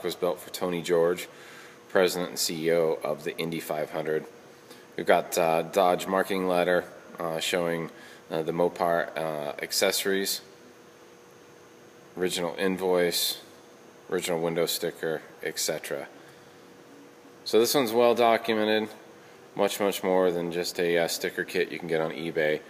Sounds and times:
Speech: 0.0 - 1.3, 1.9 - 4.3, 5.0 - 10.5, 12.2 - 13.5, 14.1 - 16.2, 17.4 - 19.0, 19.6 - 22.6.

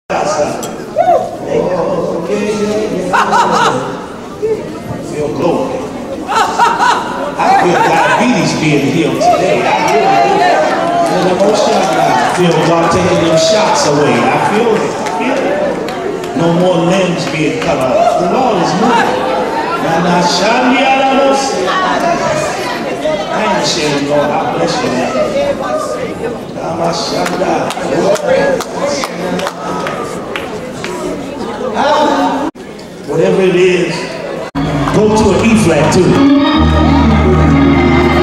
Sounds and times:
Inside, large room or hall: 0.1 - 38.2.

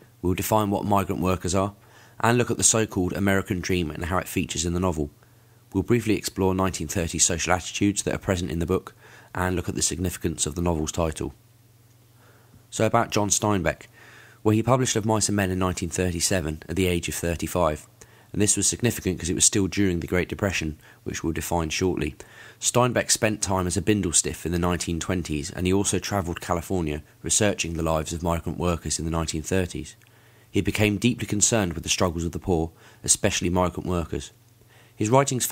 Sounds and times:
Speech: 0.2 - 11.4, 12.7 - 34.4, 35.0 - 35.5.

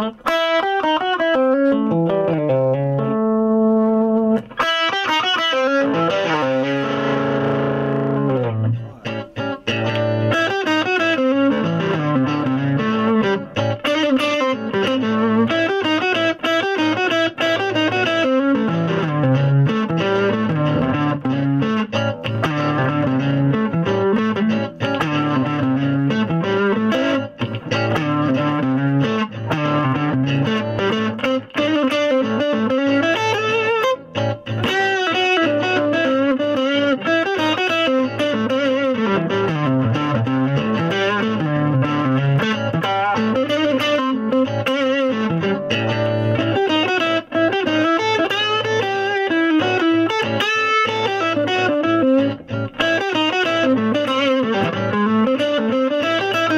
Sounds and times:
Guitar: 0.0 - 56.5
Inside, small room: 0.0 - 56.5.

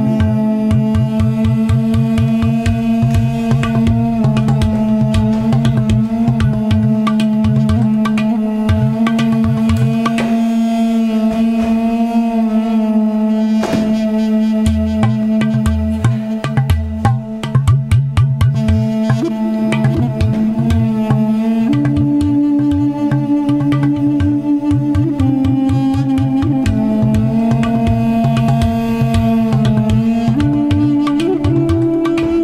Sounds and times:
Drum: 0.2 - 10.4, 13.6 - 22.9, 23.5 - 32.3.

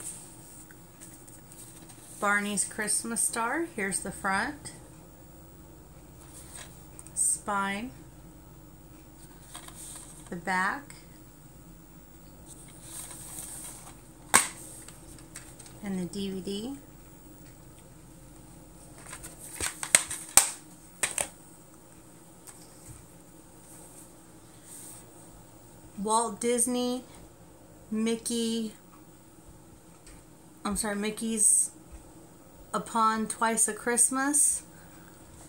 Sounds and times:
Inside, small room: 0.0 - 35.4
Speech: 2.2 - 4.8, 7.2 - 8.0, 10.3 - 11.1, 15.8 - 16.9, 26.0 - 27.2, 27.9 - 28.8, 30.6 - 31.8, 32.7 - 34.7.

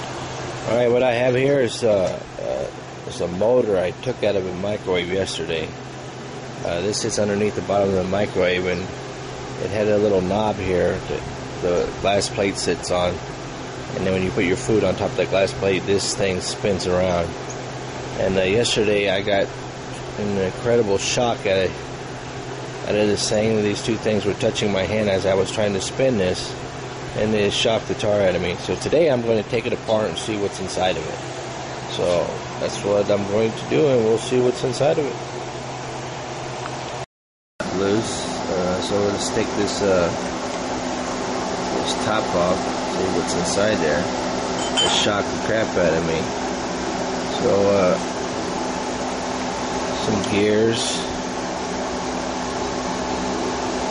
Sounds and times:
Speech: 0.6 - 5.8, 6.6 - 8.9, 9.6 - 13.2, 13.9 - 17.4, 18.2 - 19.5, 20.1 - 21.8, 22.8 - 26.6, 27.2 - 31.2, 31.9 - 35.2, 37.6 - 40.2, 41.7 - 44.1, 44.8 - 46.3, 47.3 - 48.1, 50.0 - 51.2.

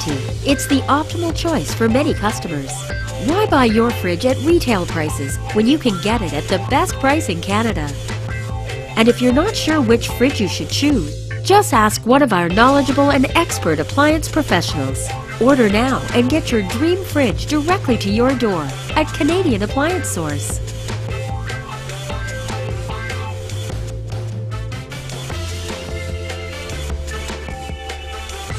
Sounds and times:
Speech: 0.0 - 8.0, 9.0 - 20.6
Music: 0.0 - 28.5.

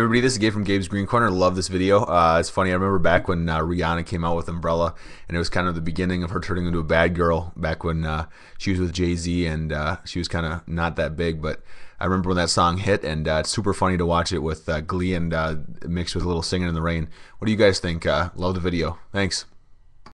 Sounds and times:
Speech: 0.0 - 19.6.

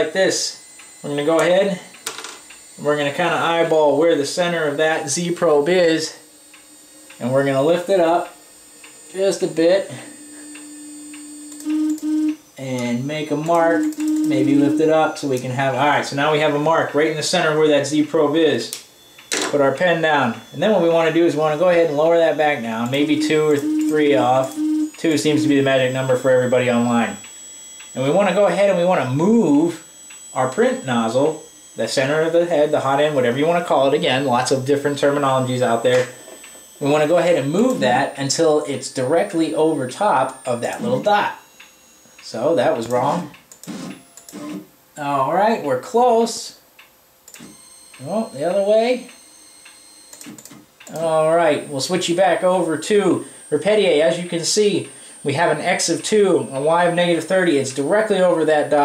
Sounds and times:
Speech: 0.0 - 1.9, 2.8 - 6.2, 7.2 - 8.4, 9.1 - 10.1, 12.6 - 18.8, 19.5 - 27.2, 28.0 - 29.8, 30.4 - 36.1, 36.8 - 41.4, 42.2 - 43.4, 45.0 - 46.6, 48.0 - 49.1, 50.9 - 58.8.

